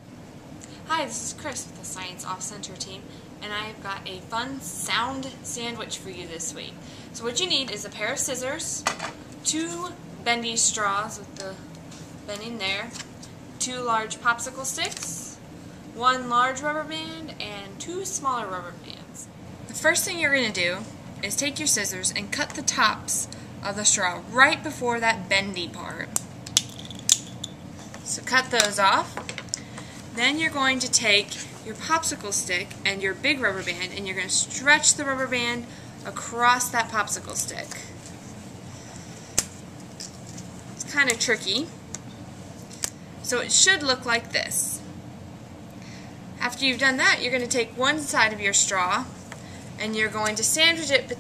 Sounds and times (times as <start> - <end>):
Speech: 0.9 - 8.9, 9.5 - 11.6, 12.3 - 13.0, 13.6 - 15.4, 16.0 - 26.2, 28.1 - 29.2, 30.2 - 37.9, 40.8 - 41.8, 43.3 - 44.9, 46.4 - 49.2, 49.8 - 51.2.